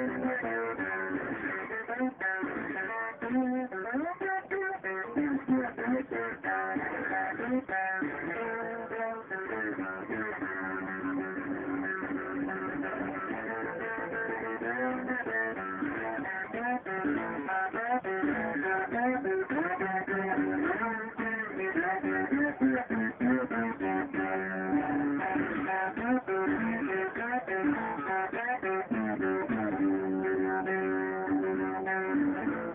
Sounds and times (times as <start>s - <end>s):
Electric guitar: 0.0s - 32.7s
Strum: 0.0s - 32.7s.